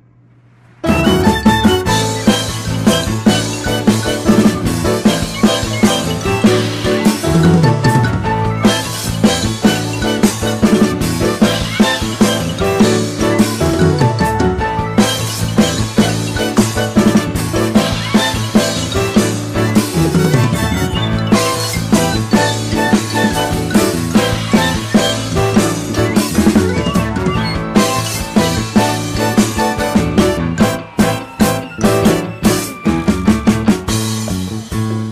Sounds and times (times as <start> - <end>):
Drum: 0.8 - 35.1
Drum kit: 0.8 - 35.1.